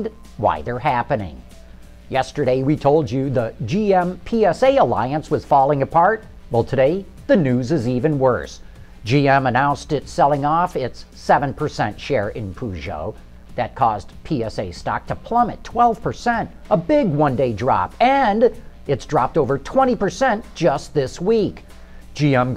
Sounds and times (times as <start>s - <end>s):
Speech: 0.0s - 1.5s, 2.1s - 21.6s, 22.2s - 22.5s
Music: 0.0s - 22.5s.